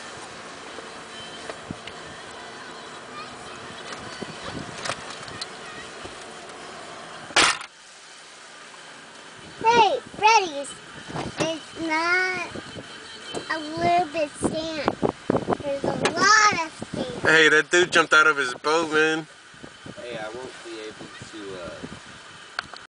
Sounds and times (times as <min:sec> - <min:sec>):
Motorboat, speedboat: 0:00.0 - 0:22.8.